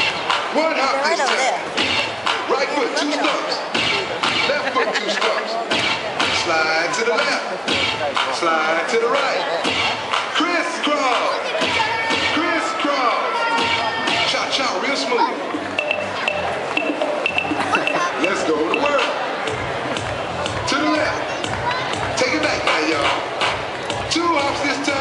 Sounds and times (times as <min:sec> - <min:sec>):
Music: 0:00.0 - 0:25.0
Speech: 0:00.5 - 0:01.7, 0:02.4 - 0:15.4, 0:17.8 - 0:19.4, 0:20.5 - 0:23.2, 0:24.1 - 0:25.0.